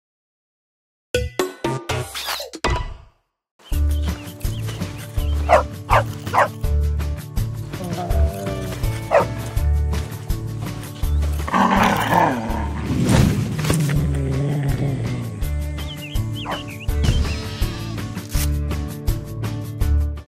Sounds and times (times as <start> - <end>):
Music: 1.2 - 20.2.